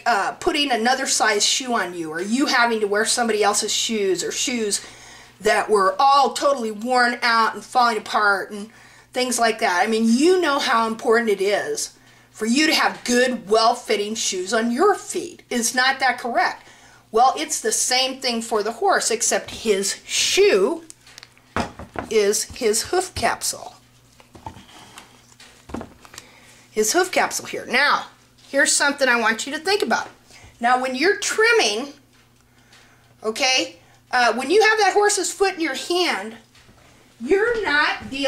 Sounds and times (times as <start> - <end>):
Speech: 0.0 - 4.8, 5.4 - 20.9, 22.1 - 23.8, 26.8 - 32.0, 33.2 - 36.4, 37.2 - 38.2.